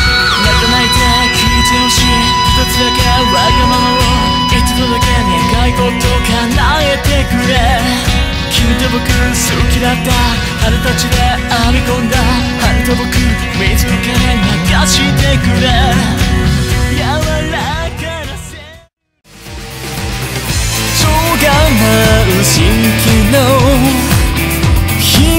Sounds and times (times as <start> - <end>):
Independent music: 0.0 - 25.3.